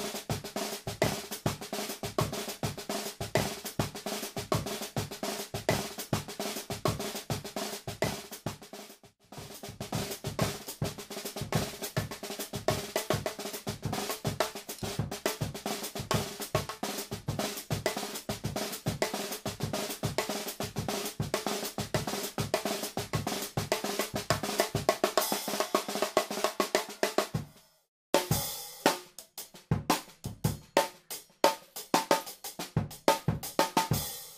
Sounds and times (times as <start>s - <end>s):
Music: 0.0s - 34.3s.